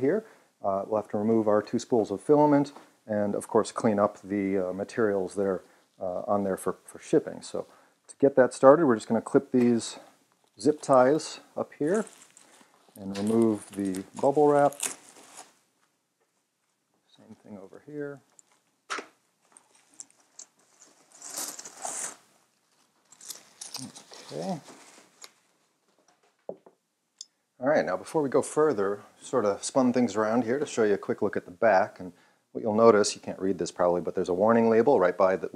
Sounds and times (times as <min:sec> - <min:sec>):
Speech: 0:00.0 - 0:12.1, 0:13.0 - 0:14.9, 0:17.1 - 0:18.3, 0:23.8 - 0:24.7, 0:27.6 - 0:35.5.